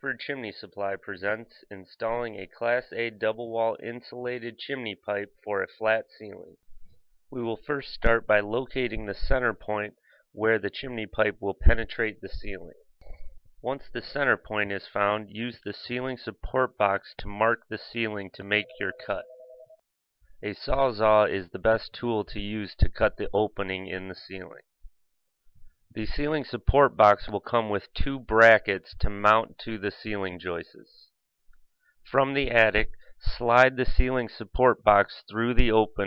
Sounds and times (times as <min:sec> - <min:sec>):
Speech: 0:00.0 - 0:06.6, 0:07.3 - 0:12.9, 0:13.6 - 0:19.4, 0:20.4 - 0:24.7, 0:25.9 - 0:31.1, 0:32.1 - 0:36.0.